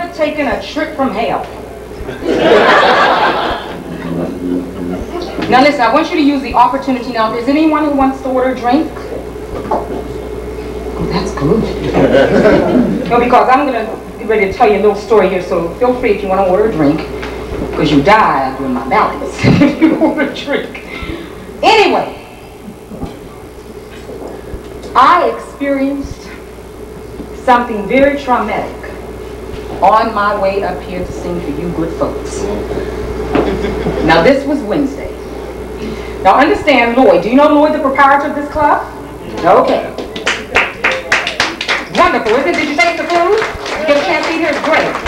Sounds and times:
Narration, monologue: 0:00.0 - 0:33.3.

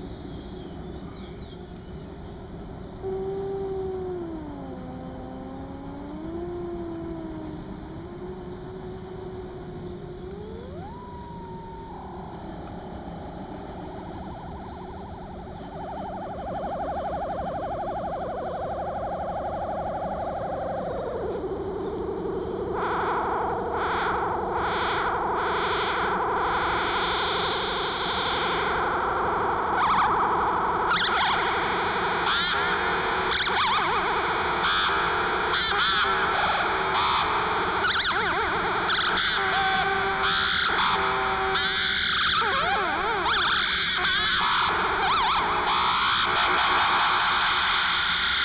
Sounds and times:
Cacophony: 0:03.0 - 0:48.4.

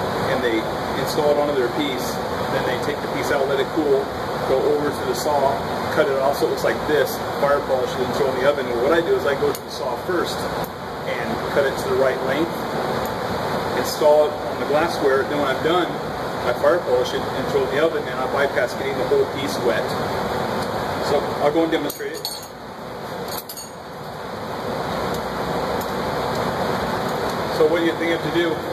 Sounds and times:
Speech: 0:00.3 - 0:10.5, 0:11.1 - 0:12.6, 0:13.8 - 0:20.0, 0:21.0 - 0:22.3, 0:27.5 - 0:28.7
Glass: 0:21.9 - 0:22.6, 0:23.3 - 0:23.8.

